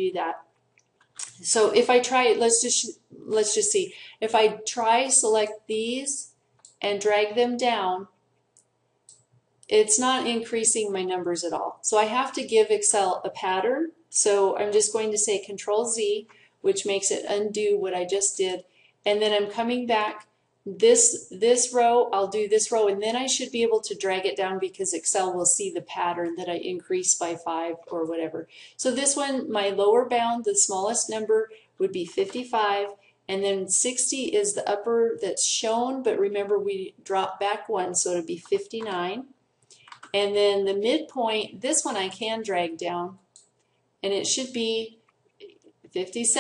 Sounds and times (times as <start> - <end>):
Speech: 0.0 - 0.4, 1.2 - 8.1, 9.7 - 39.3, 40.1 - 43.2, 44.0 - 45.0, 45.9 - 46.4
Inside, small room: 0.0 - 46.4.